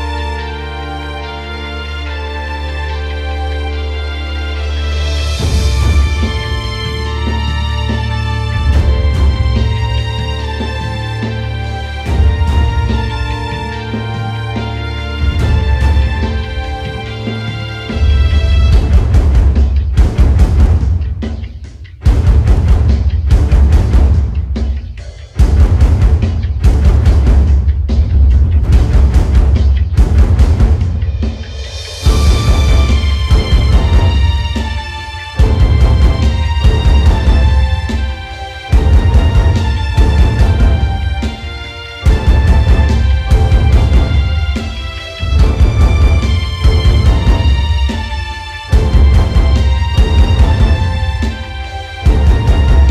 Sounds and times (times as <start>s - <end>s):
Music: 0.0s - 52.9s.